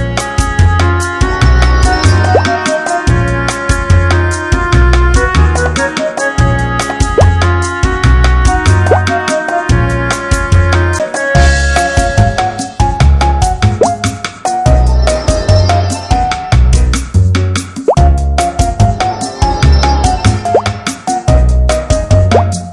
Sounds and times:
Music: 0.0s - 22.7s.

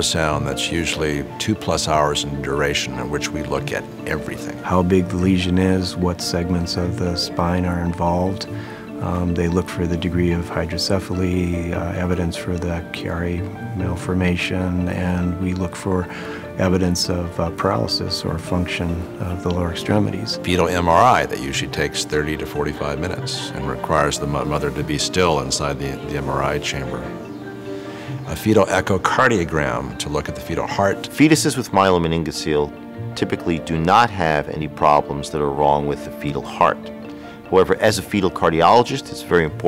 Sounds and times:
Speech: 0.0s - 27.2s, 28.2s - 36.9s, 37.5s - 39.6s
Music: 0.0s - 39.6s.

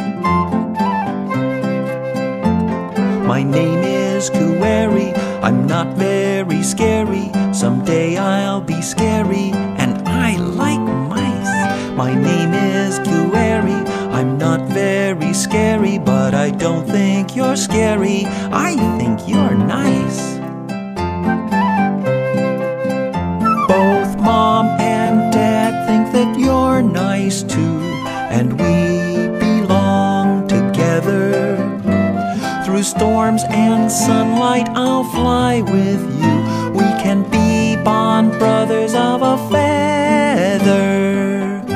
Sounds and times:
Music for children: 0.0s - 41.7s.

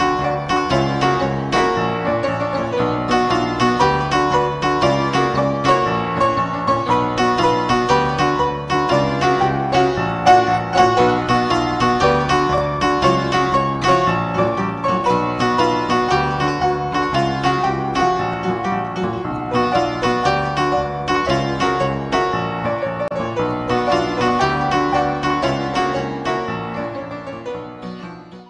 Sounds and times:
Music: 0.0s - 28.4s.

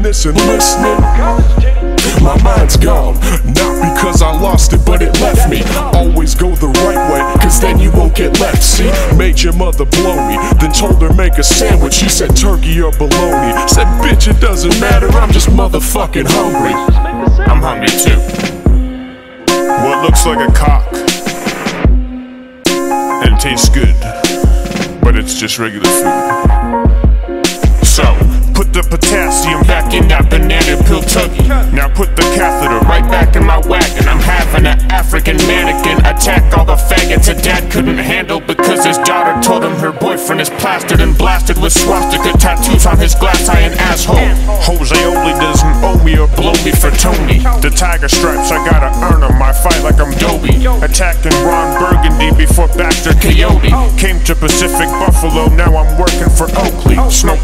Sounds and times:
Rapping: 0.0s - 18.5s, 19.5s - 21.1s, 23.2s - 24.3s, 25.0s - 26.4s, 27.8s - 57.4s
Music: 0.0s - 57.4s.

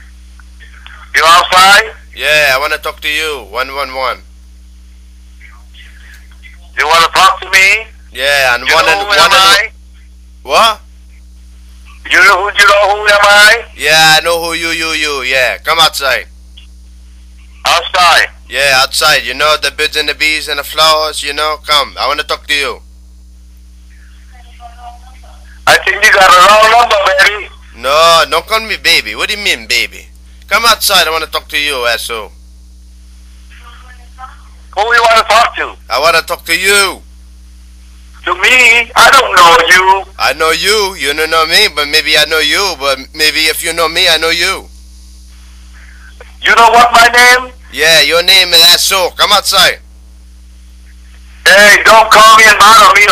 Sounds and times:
Speech: 0.6s - 4.2s, 5.4s - 9.8s, 10.4s - 10.9s, 11.9s - 16.3s, 17.5s - 22.8s, 24.0s - 32.4s, 33.6s - 37.1s, 38.2s - 44.7s, 46.2s - 49.8s, 51.4s - 53.1s.

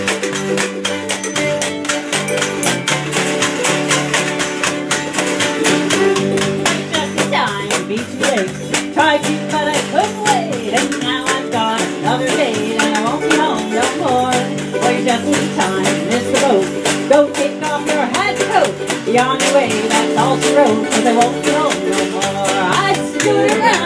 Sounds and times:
Musical instrument: 0.0s - 23.8s.

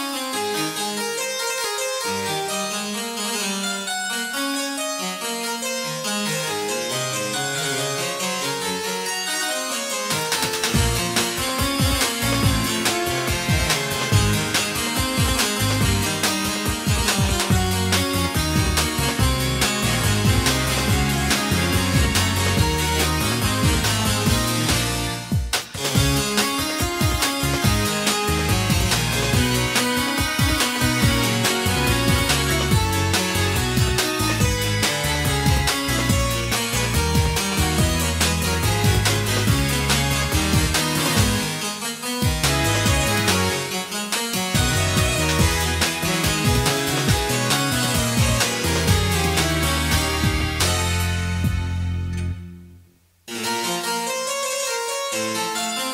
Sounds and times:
Music: 0.0s - 55.9s.

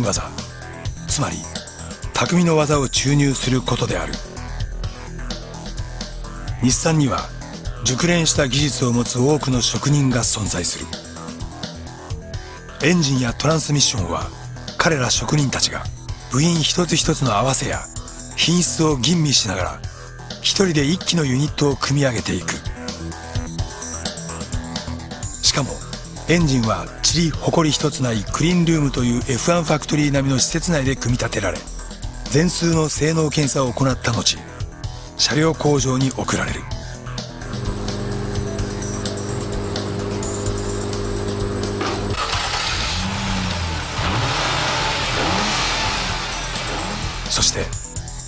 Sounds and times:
Speech: 0.0s - 0.4s, 1.1s - 4.2s, 6.6s - 11.0s, 12.8s - 22.7s, 25.4s - 31.7s, 32.3s - 34.5s, 35.2s - 36.7s, 47.3s - 47.8s
Music: 0.0s - 48.2s.

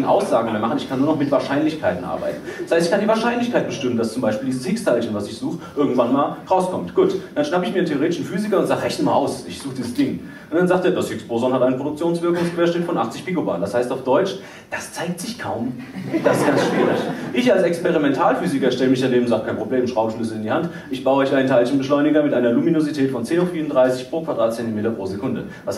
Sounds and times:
Speech: 0.0s - 25.7s.

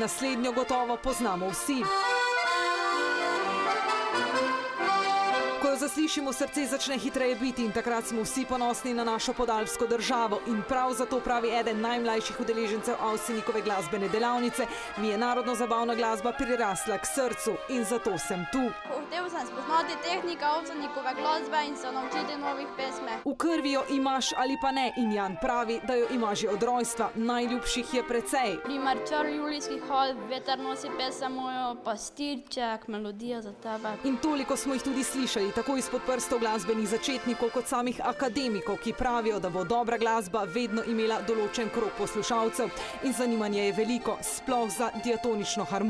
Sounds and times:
Music: 0.0s - 45.8s
Speech: 5.7s - 45.8s.

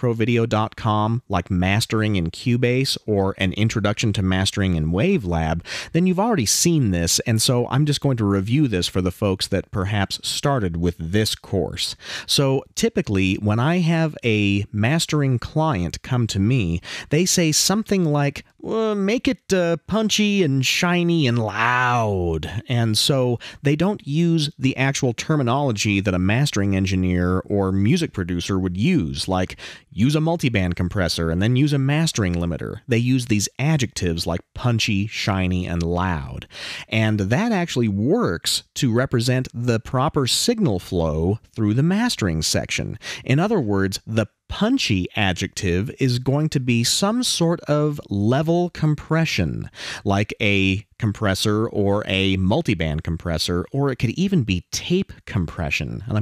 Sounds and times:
Speech: 0.0s - 56.2s.

